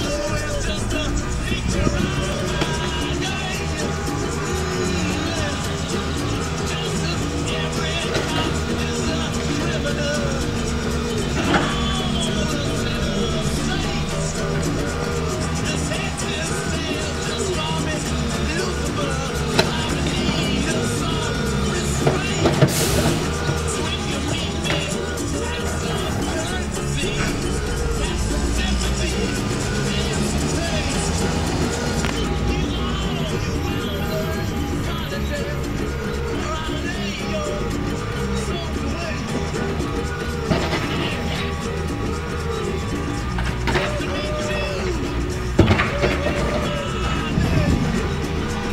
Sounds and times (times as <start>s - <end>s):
Music: 0.0s - 48.7s
Truck: 0.0s - 48.7s.